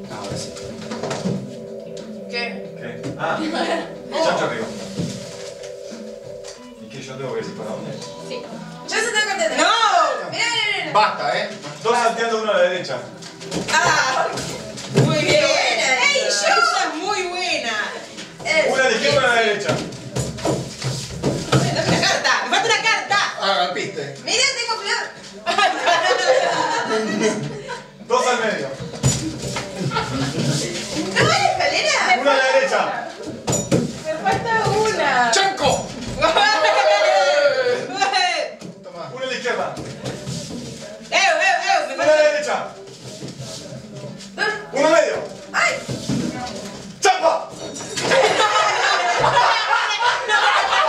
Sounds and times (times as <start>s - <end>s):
Music: 0.0s - 50.8s.